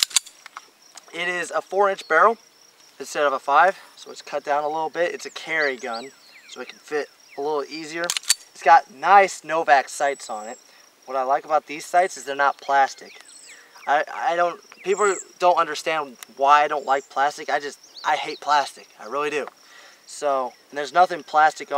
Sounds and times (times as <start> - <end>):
Insect: 0.0 - 21.7
Outside, rural or natural: 0.0 - 21.7
Speech: 1.1 - 2.4, 3.0 - 13.2, 13.8 - 19.5, 20.1 - 21.7.